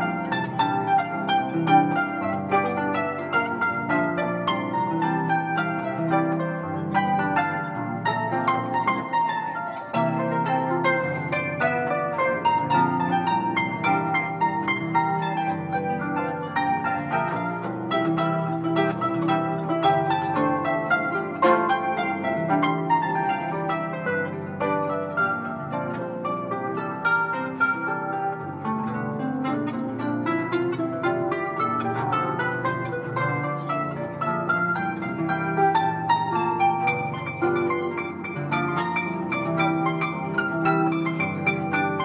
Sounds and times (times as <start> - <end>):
Harp: 0.0 - 42.0
Inside, small room: 0.0 - 42.0
Plucked string instrument: 0.0 - 42.0.